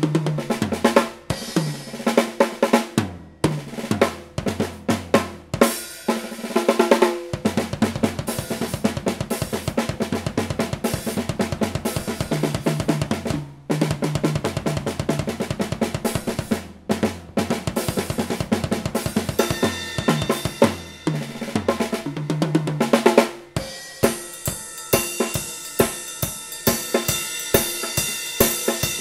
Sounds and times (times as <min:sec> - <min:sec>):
Bass drum: 0:00.0 - 0:02.1, 0:03.0 - 0:05.7, 0:07.2 - 0:26.1
Drum kit: 0:00.0 - 0:29.0
Snare drum: 0:00.0 - 0:29.0.